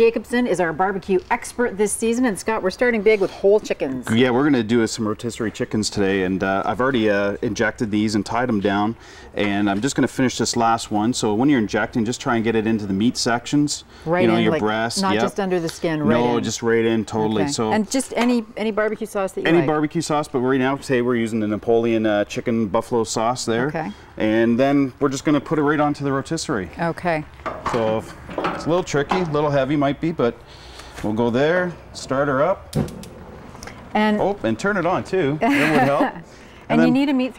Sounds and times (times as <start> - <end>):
Speech: 14.1 - 15.4, 16.0 - 17.8, 36.7 - 37.1.